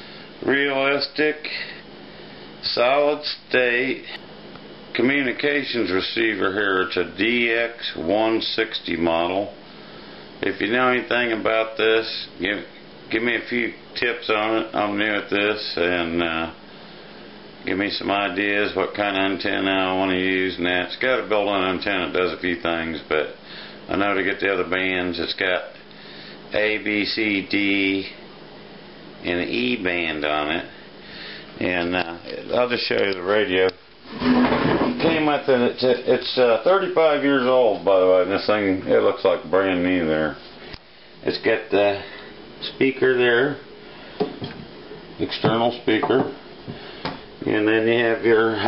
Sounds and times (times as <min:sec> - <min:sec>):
Speech: 0:00.4 - 0:01.8, 0:02.6 - 0:04.2, 0:04.9 - 0:09.6, 0:10.4 - 0:16.6, 0:17.6 - 0:25.8, 0:26.5 - 0:28.2, 0:29.2 - 0:30.8, 0:31.6 - 0:33.8, 0:35.0 - 0:40.4, 0:41.2 - 0:43.6, 0:45.2 - 0:46.4, 0:47.4 - 0:48.6.